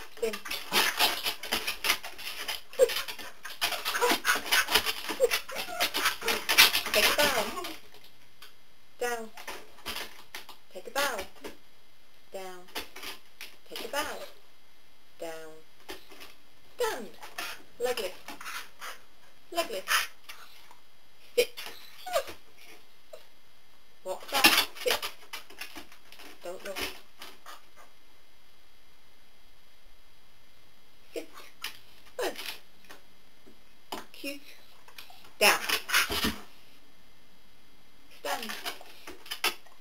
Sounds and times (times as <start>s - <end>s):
Speech: 0.1s - 0.5s, 6.8s - 7.8s, 9.0s - 9.4s, 10.7s - 11.4s, 12.3s - 12.8s, 13.6s - 14.4s, 15.2s - 15.7s, 16.8s - 17.2s, 17.8s - 18.2s, 19.5s - 20.1s, 21.4s - 21.6s, 24.0s - 25.0s, 26.4s - 27.0s, 31.1s - 31.5s, 32.2s - 32.6s, 34.1s - 34.6s, 35.4s - 35.8s, 38.2s - 38.8s.